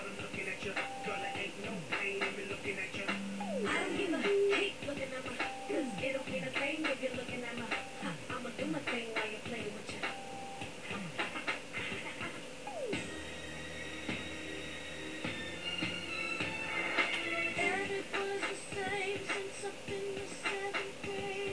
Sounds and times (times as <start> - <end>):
Music: 0.0 - 21.5.